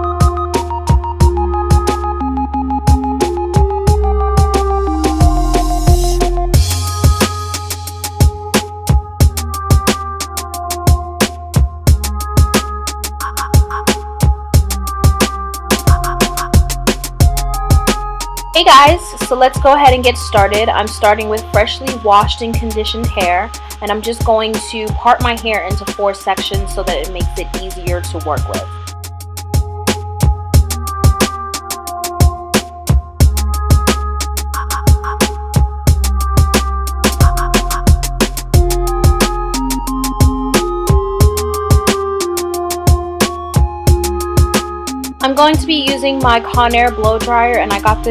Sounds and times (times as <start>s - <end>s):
Music: 0.0s - 48.1s
Speech: 18.6s - 28.7s, 45.2s - 48.1s.